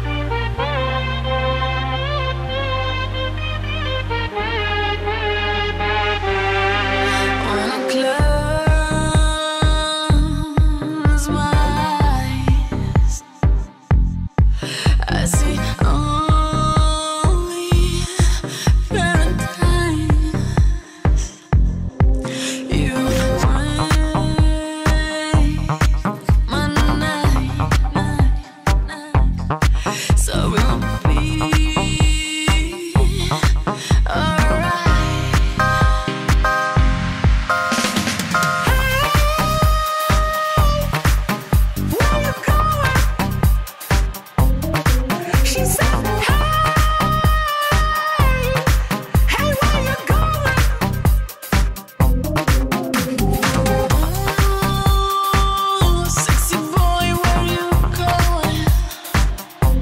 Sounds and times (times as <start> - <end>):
Music: 0.0 - 59.8.